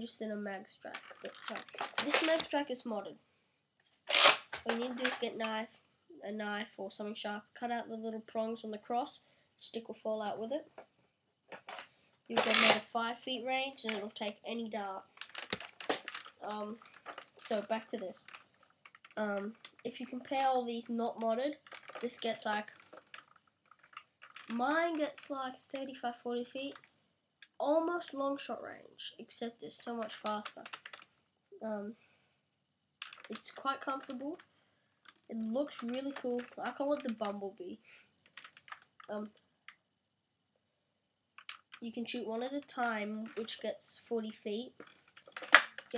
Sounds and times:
Child speech, kid speaking: 0:00.0 - 0:03.2, 0:04.7 - 0:10.7, 0:12.3 - 0:15.1, 0:16.4 - 0:18.3, 0:19.2 - 0:22.8, 0:24.5 - 0:26.8, 0:27.6 - 0:30.7, 0:31.6 - 0:32.0, 0:33.3 - 0:34.4, 0:35.3 - 0:38.0, 0:39.1 - 0:39.4, 0:41.8 - 0:44.8
Male speech, man speaking: 0:00.0 - 0:03.2, 0:04.7 - 0:10.6, 0:12.3 - 0:15.0.

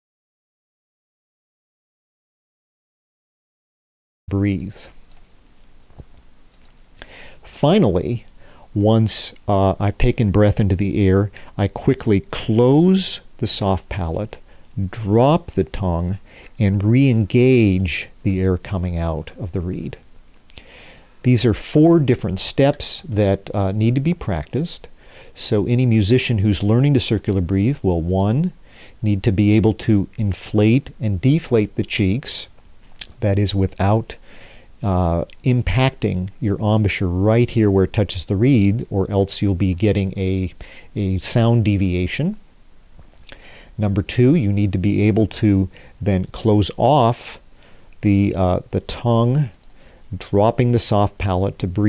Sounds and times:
Speech: 0:04.3 - 0:05.0, 0:07.5 - 0:20.0, 0:21.2 - 0:34.2, 0:34.8 - 0:42.4, 0:43.8 - 0:51.8.

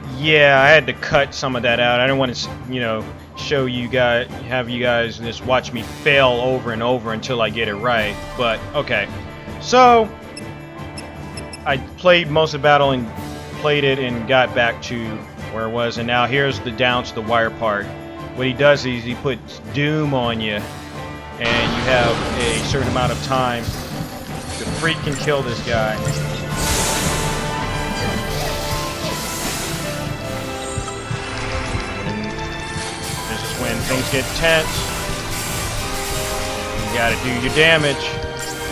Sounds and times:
Music: 0:00.0 - 0:38.7
Speech: 0:00.1 - 0:10.1, 0:11.6 - 0:20.7, 0:21.4 - 0:23.7, 0:24.6 - 0:26.5, 0:33.3 - 0:34.9, 0:36.8 - 0:38.2.

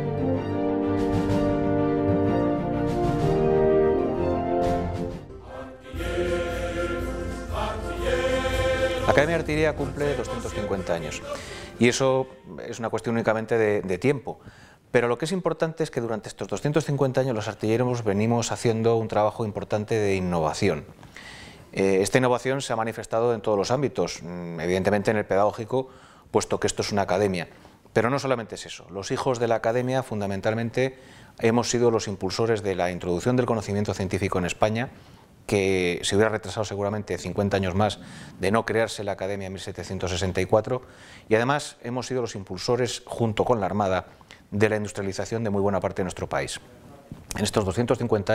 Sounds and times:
Speech: 0:09.1 - 0:14.4, 0:15.0 - 0:20.9, 0:21.8 - 0:34.9, 0:35.5 - 0:48.3.

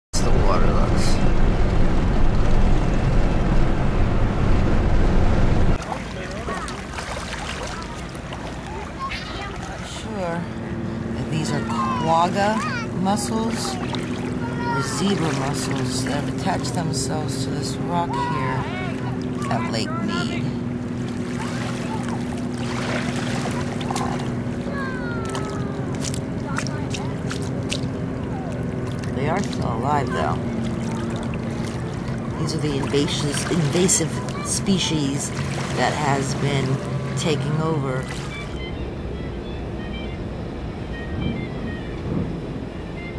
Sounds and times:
Outside, rural or natural: 0:00.0 - 0:43.1.

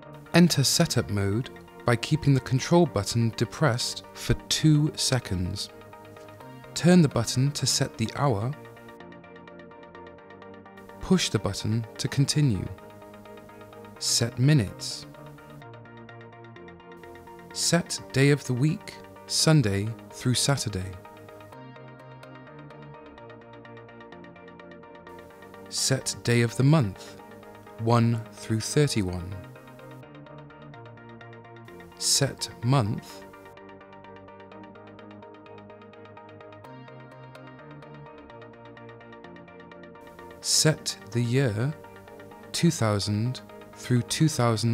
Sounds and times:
Music: 0:00.0 - 0:44.7
Speech: 0:00.4 - 0:05.7, 0:06.8 - 0:08.6, 0:11.0 - 0:12.8, 0:14.0 - 0:15.1, 0:17.6 - 0:21.0, 0:25.7 - 0:27.1, 0:27.8 - 0:29.4, 0:32.0 - 0:33.2, 0:40.4 - 0:41.8, 0:42.6 - 0:44.7.

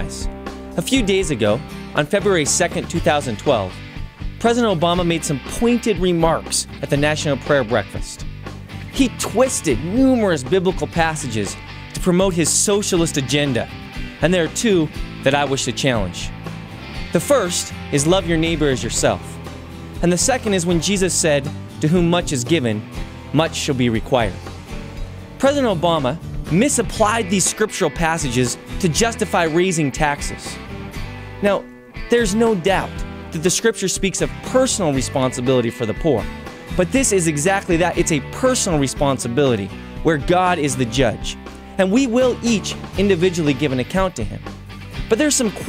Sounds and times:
Male speech, man speaking: 0:00.0 - 0:03.8, 0:04.4 - 0:08.2, 0:09.0 - 0:16.3, 0:17.2 - 0:19.4, 0:20.0 - 0:24.4, 0:25.4 - 0:30.6, 0:31.4 - 0:44.5, 0:45.1 - 0:45.6
Music: 0:00.0 - 0:45.6.

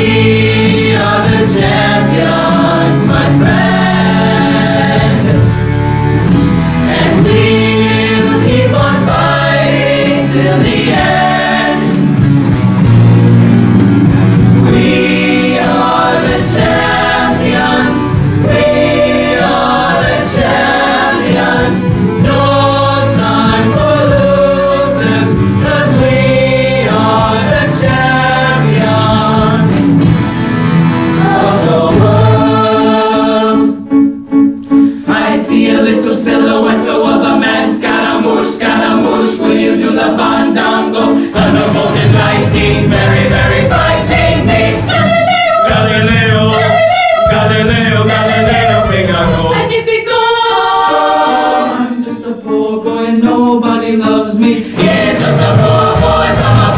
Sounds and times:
Choir: 0:00.0 - 0:12.6, 0:14.4 - 0:30.1, 0:30.9 - 0:33.9, 0:35.0 - 0:56.7.

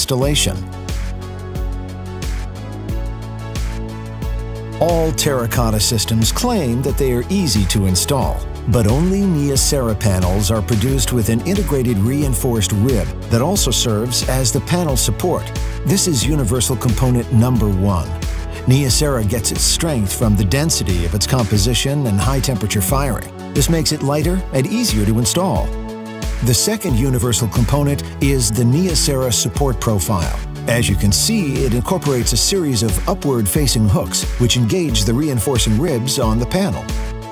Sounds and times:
Speech: 0:00.0 - 0:00.7, 0:04.8 - 0:25.8, 0:26.4 - 0:36.9
Music: 0:00.0 - 0:37.3.

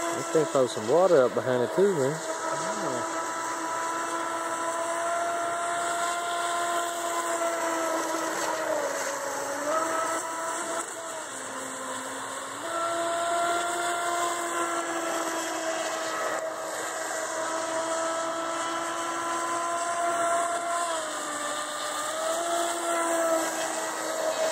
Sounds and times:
Speech: 0:00.2 - 0:03.1.

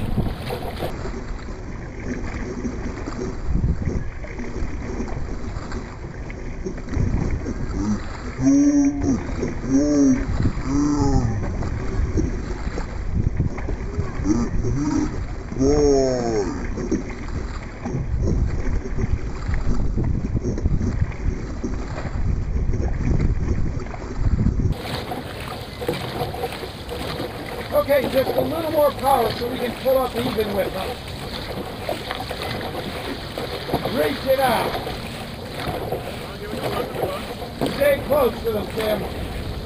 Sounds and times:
Rowboat, canoe, kayak: 0:00.0 - 0:39.6.

